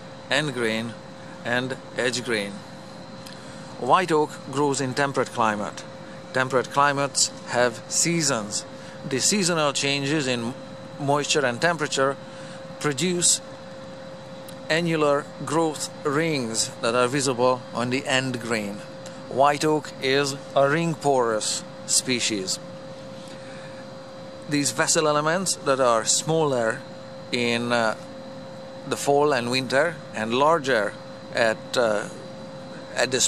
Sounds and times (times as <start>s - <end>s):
Speech: 0.3s - 2.7s, 3.8s - 12.2s, 12.8s - 13.4s, 14.6s - 22.6s, 24.5s - 28.0s, 28.9s - 33.2s.